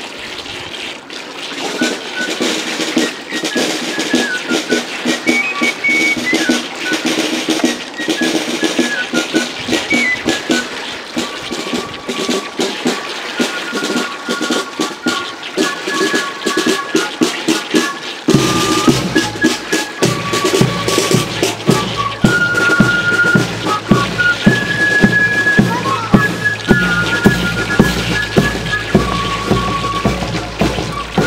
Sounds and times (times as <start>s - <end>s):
Stream: 0.0s - 31.2s
Music: 1.6s - 31.2s.